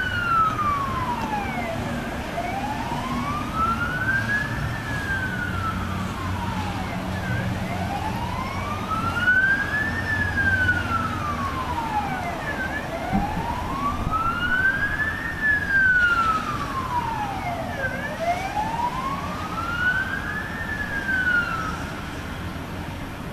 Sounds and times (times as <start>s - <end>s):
Police car (siren): 0.0s - 23.3s.